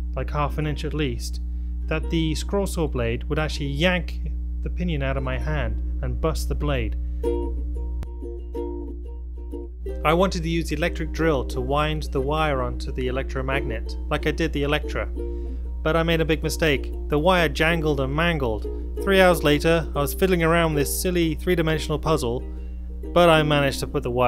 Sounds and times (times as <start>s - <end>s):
Speech: 0.1s - 7.0s, 10.0s - 15.1s, 15.9s - 22.4s, 23.2s - 24.2s
Music: 1.8s - 2.4s, 7.2s - 24.2s.